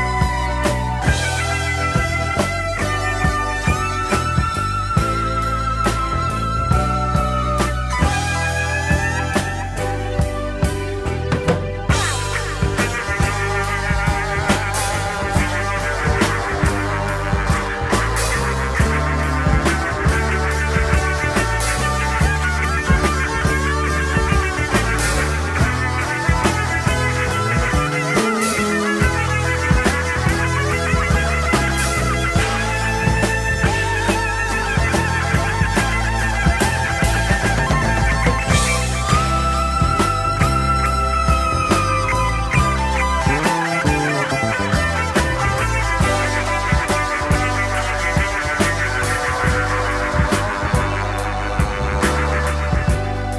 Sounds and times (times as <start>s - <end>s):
Music: 0.0s - 53.3s.